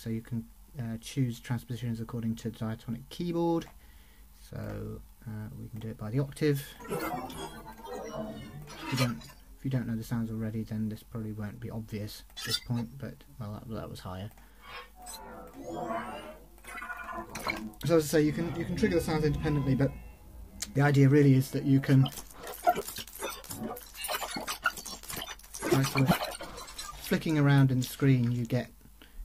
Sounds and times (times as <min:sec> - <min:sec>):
Speech: 0:00.0 - 0:03.7, 0:04.4 - 0:14.3, 0:17.8 - 0:22.2, 0:25.6 - 0:26.2, 0:27.0 - 0:28.8.